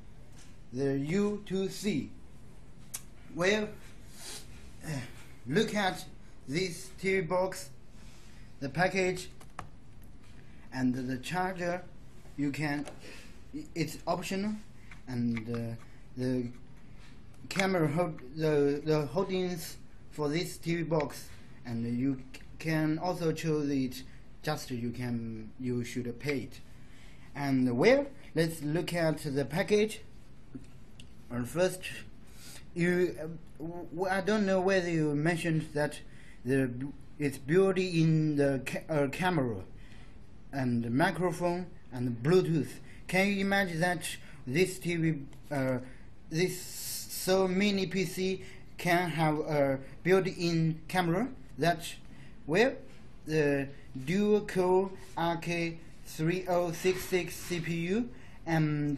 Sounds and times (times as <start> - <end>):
Speech: 0.7 - 2.2, 3.0 - 3.8, 4.8 - 7.8, 8.6 - 9.4, 10.7 - 16.6, 17.4 - 26.6, 27.4 - 30.1, 31.3 - 39.7, 40.5 - 58.9.